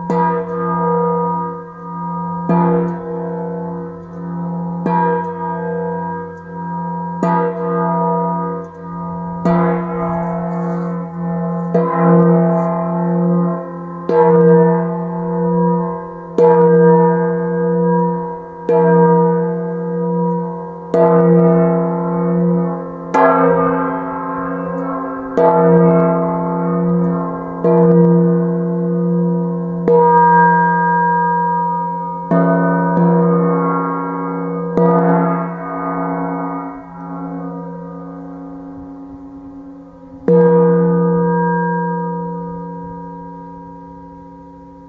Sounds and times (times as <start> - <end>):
Gong: 0.0 - 44.8.